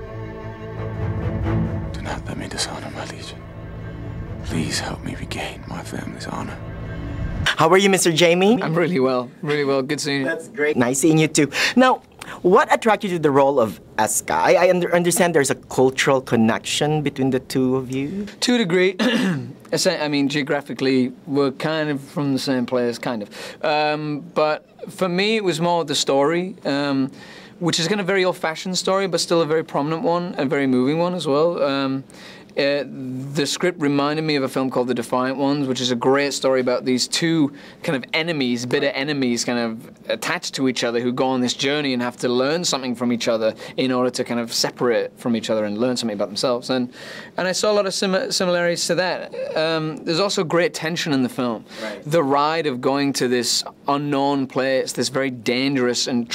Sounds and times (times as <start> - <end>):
Speech: 4.4 - 6.6, 7.5 - 19.1, 19.7 - 32.0, 32.6 - 56.3.